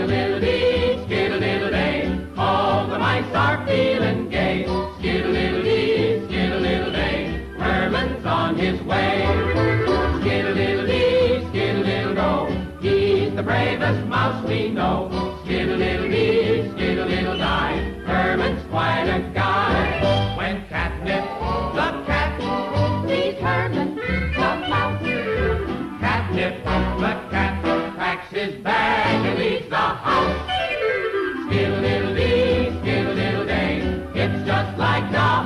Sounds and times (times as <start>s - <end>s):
Music: 0.0s - 35.4s.